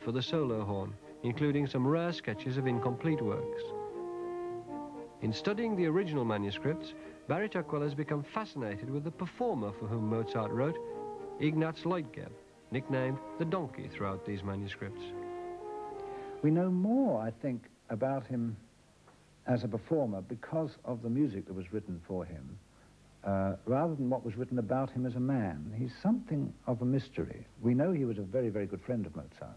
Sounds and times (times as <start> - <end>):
Speech: 0.0 - 3.7, 5.2 - 10.8, 11.4 - 15.2, 16.4 - 18.7, 19.4 - 22.6, 23.2 - 29.5
French horn: 0.0 - 17.4.